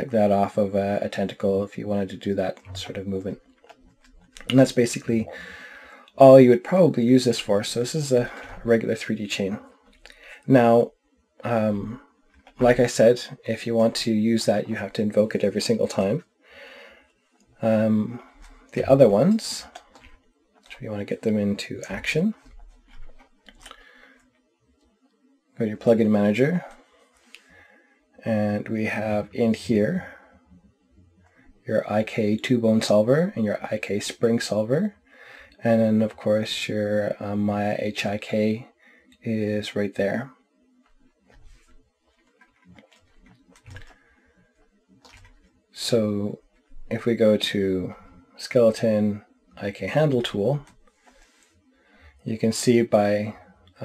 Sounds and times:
Speech: 0.0 - 3.4, 4.4 - 5.5, 6.2 - 9.6, 10.4 - 12.0, 12.6 - 16.3, 17.6 - 19.8, 20.7 - 22.5, 25.6 - 26.8, 28.2 - 30.2, 31.7 - 35.0, 35.6 - 40.3, 45.8 - 50.7, 52.2 - 53.8
Inside, small room: 0.0 - 53.8.

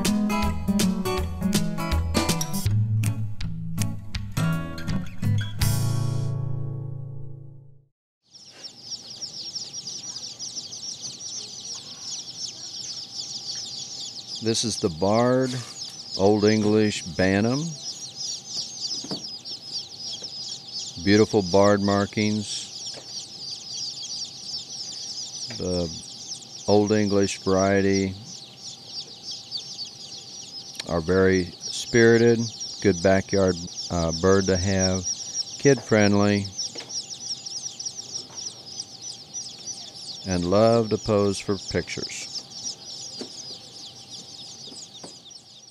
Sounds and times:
Speech: 14.4 - 17.9, 21.0 - 22.7, 25.5 - 26.0, 26.7 - 28.2, 30.8 - 36.5, 39.8 - 42.3.

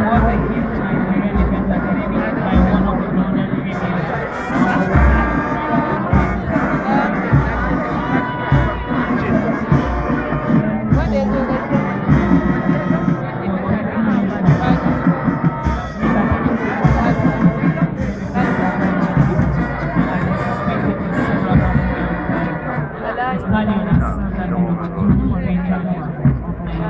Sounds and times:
Music: 0.0 - 26.8
Speech: 0.0 - 26.8.

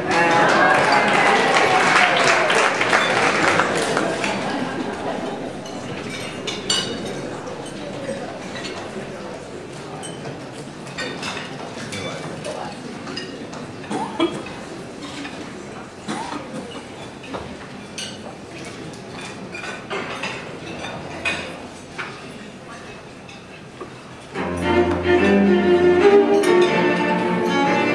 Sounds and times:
Speech: 0.0 - 23.2.

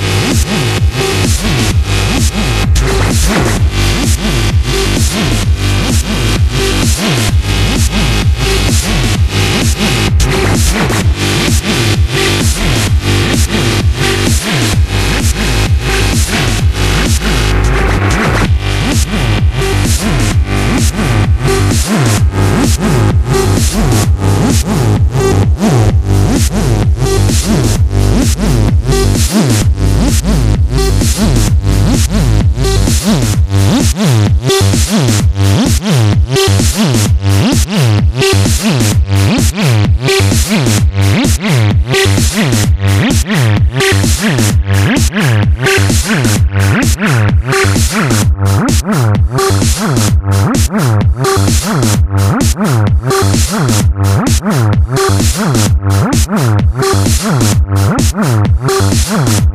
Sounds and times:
Techno: 0.0 - 59.5.

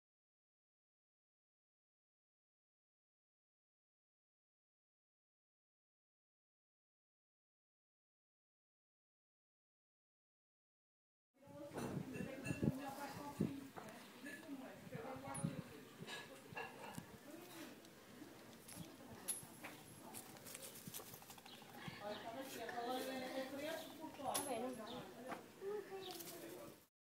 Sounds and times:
Speech: 11.4 - 20.8, 21.7 - 26.9.

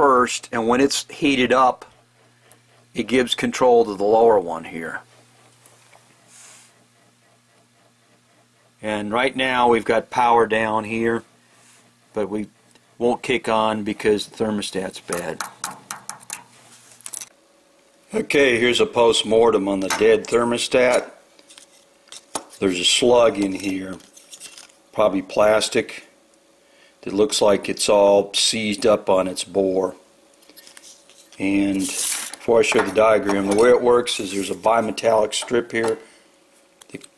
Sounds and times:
Speech: 0.0 - 1.9, 3.0 - 5.1, 8.8 - 11.3, 12.1 - 15.4, 18.1 - 21.2, 22.6 - 24.0, 25.0 - 26.2, 27.0 - 30.0, 31.4 - 36.1.

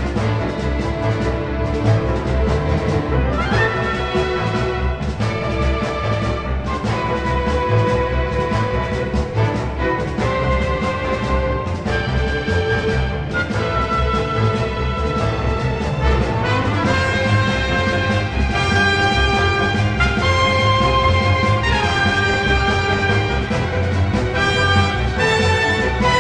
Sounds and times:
Music: 0.0 - 26.2.

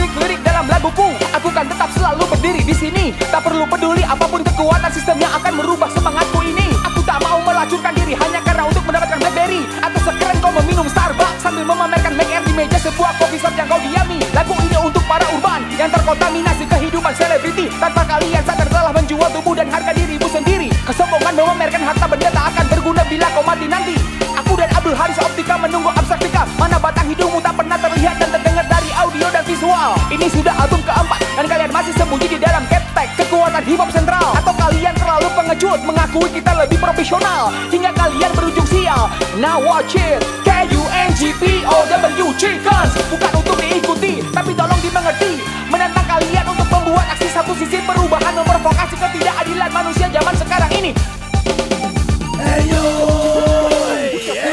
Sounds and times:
Music: 0.0 - 54.5.

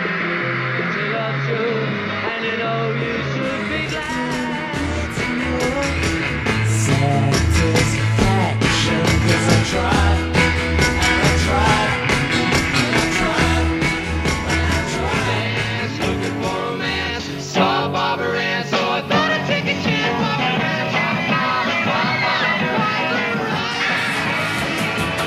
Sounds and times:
Heavy metal: 0.0 - 25.2.

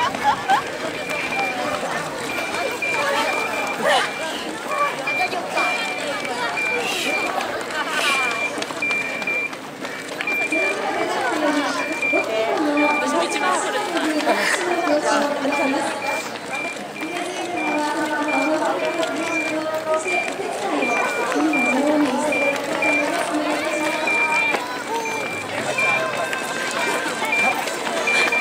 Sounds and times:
Outside, urban or manmade: 0.0 - 28.4
Run: 0.0 - 28.4
Speech: 0.8 - 9.4, 10.2 - 28.4.

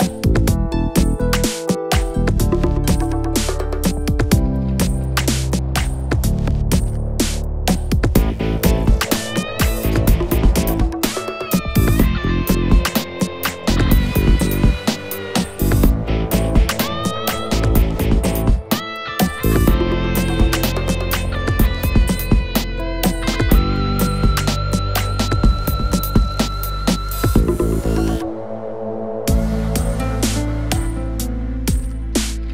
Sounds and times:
Music: 0.0 - 32.5.

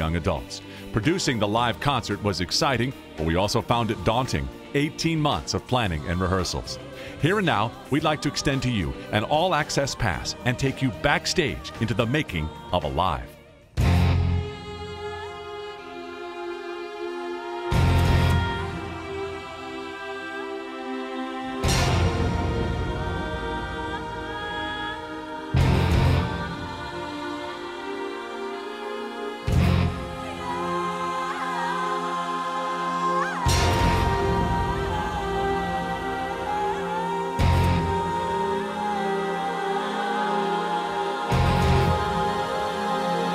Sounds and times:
Speech: 0.0 - 13.4
Music: 0.0 - 43.3.

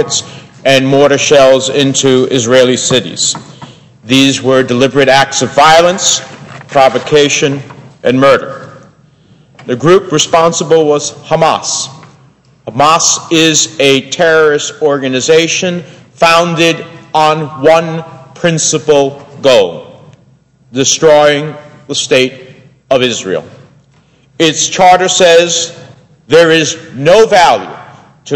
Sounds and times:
Male speech, man speaking: 0.0 - 3.4, 4.1 - 8.6, 9.7 - 12.0, 12.7 - 20.0, 20.8 - 23.6, 24.4 - 28.3
Narration, monologue: 0.0 - 28.3.

